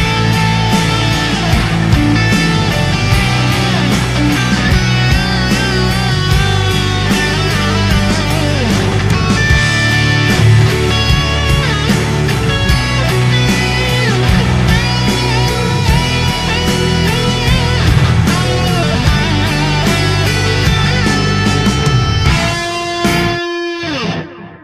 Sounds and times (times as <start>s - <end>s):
Bass guitar: 0.0s - 24.6s.